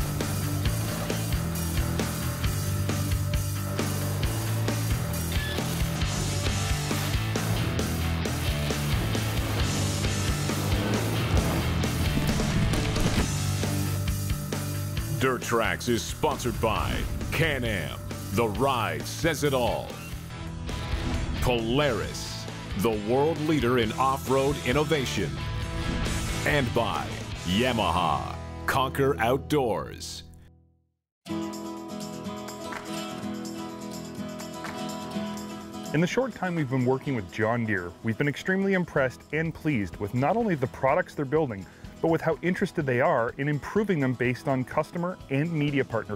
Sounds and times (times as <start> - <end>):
Music: 0.0 - 46.1
Speech: 15.1 - 20.0, 21.4 - 25.4, 26.4 - 30.3, 35.9 - 46.1.